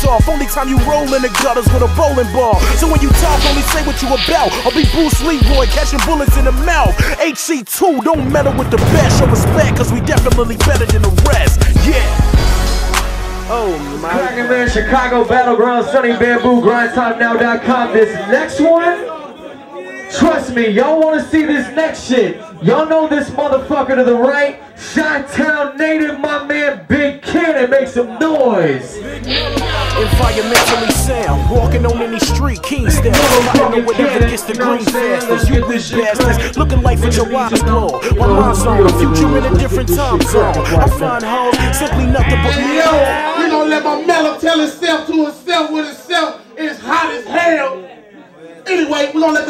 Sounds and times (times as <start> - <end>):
Music: 0.0 - 15.4, 29.0 - 43.2
Speech: 13.5 - 49.5.